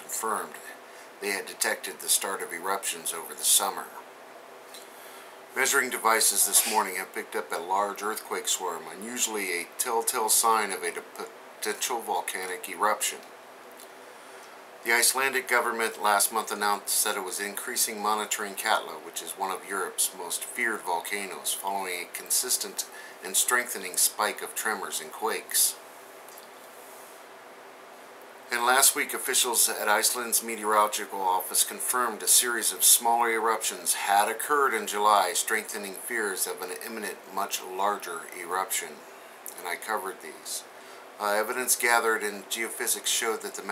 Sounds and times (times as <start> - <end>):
Speech: 0.0 - 4.1, 5.6 - 13.3, 14.8 - 25.8, 28.5 - 43.7.